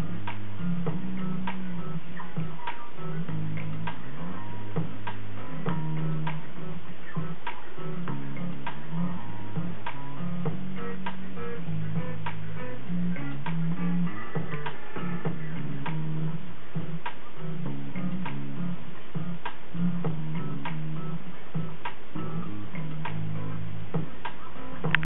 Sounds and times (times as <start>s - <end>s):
Music: 0.0s - 25.0s.